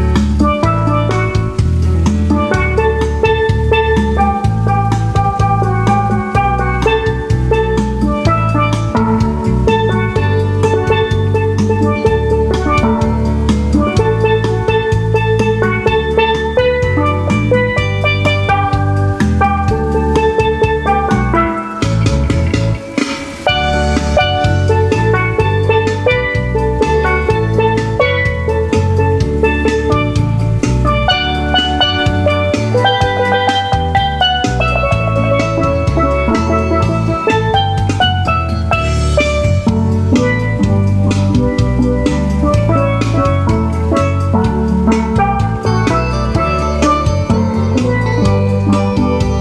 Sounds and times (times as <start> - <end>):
Outside, urban or manmade: 0.0 - 49.4
Steelpan: 0.0 - 49.4.